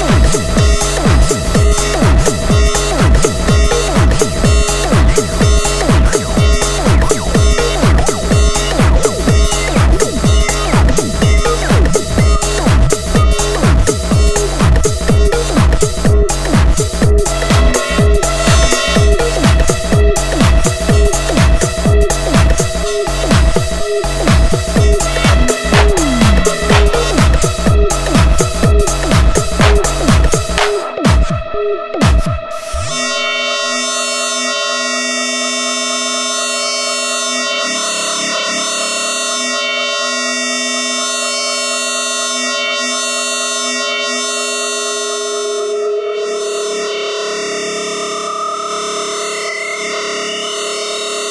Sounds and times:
Electronica: 0.0s - 51.3s.

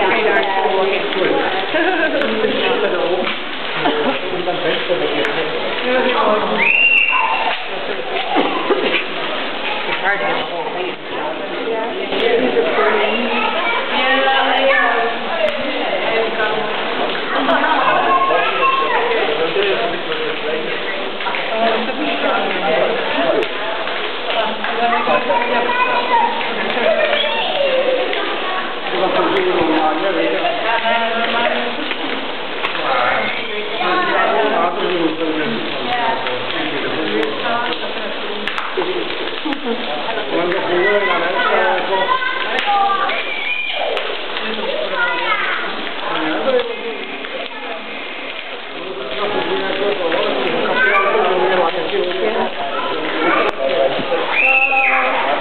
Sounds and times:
Speech: 0.0s - 32.1s, 32.8s - 55.4s.

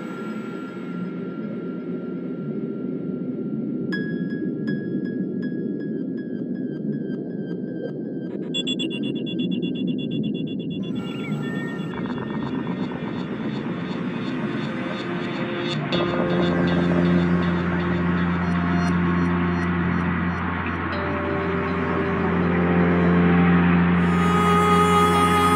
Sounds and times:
Music: 0.0s - 25.5s.

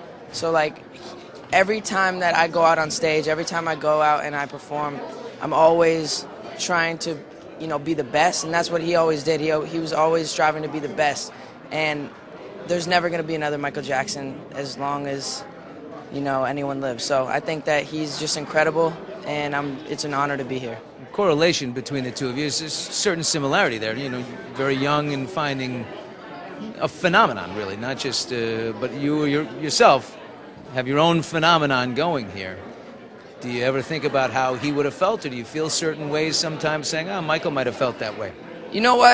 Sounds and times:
Narration, monologue: 0.2s - 26.0s
Male speech, man speaking: 0.3s - 0.8s, 1.5s - 12.1s, 12.7s - 15.4s, 16.2s - 25.9s, 26.6s - 32.6s, 33.4s - 39.1s.

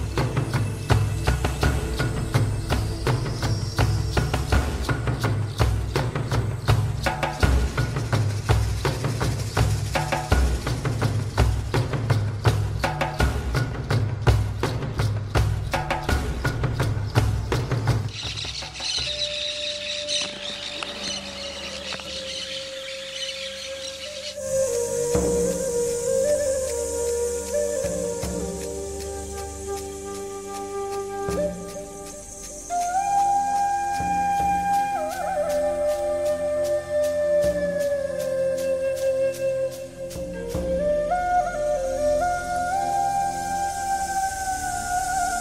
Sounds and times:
Music: 0.0s - 45.4s
Animal: 18.1s - 24.4s.

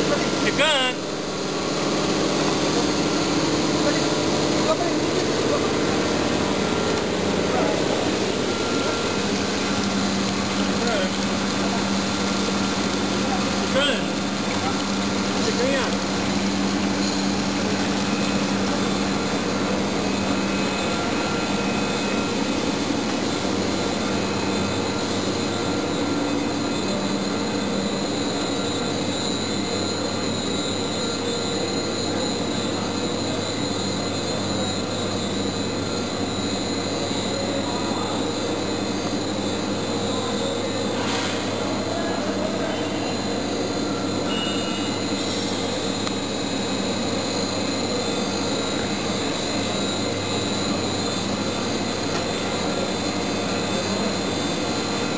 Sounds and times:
Speech: 0.0s - 1.0s, 13.2s - 16.0s, 41.6s - 43.3s.

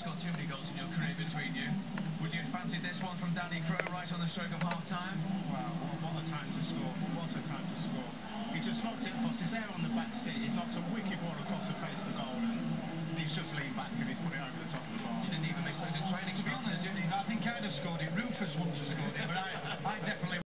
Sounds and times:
Speech: 0.0s - 20.5s.

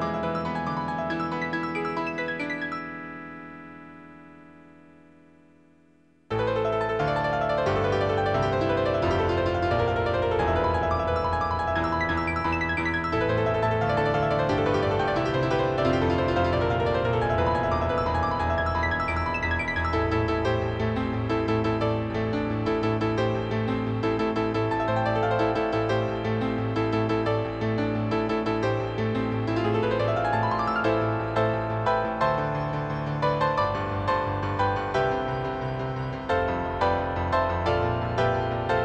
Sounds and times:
Music: 0.0s - 38.8s.

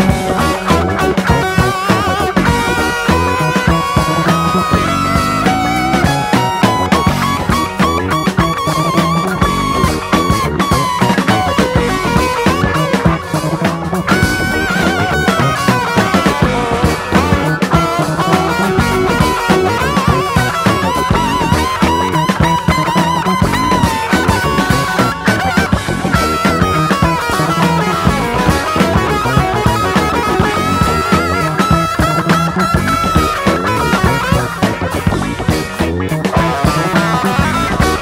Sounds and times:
Music: 0.0s - 38.0s.

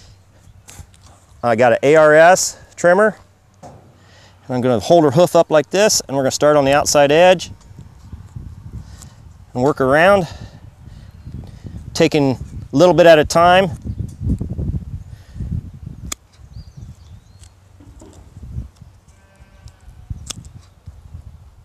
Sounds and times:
Speech: 1.4s - 3.2s, 4.5s - 7.5s, 9.6s - 10.3s, 12.0s - 13.8s.

